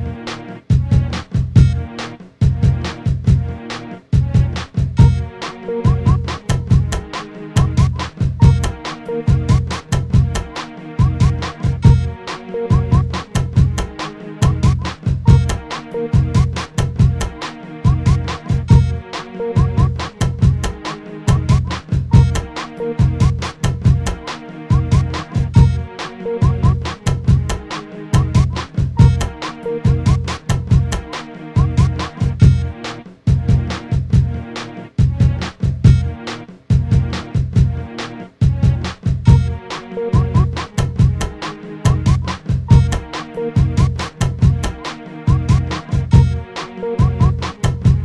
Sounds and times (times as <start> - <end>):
Electronica: 0.0 - 48.0.